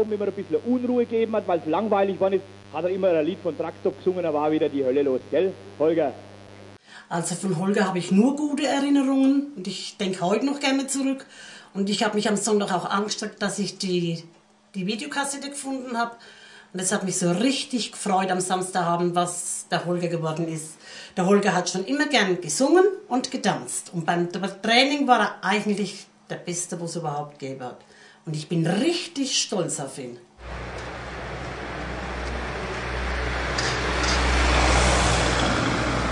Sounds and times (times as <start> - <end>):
Speech: 0.0 - 6.2, 7.1 - 11.2, 11.8 - 16.2, 16.8 - 30.3.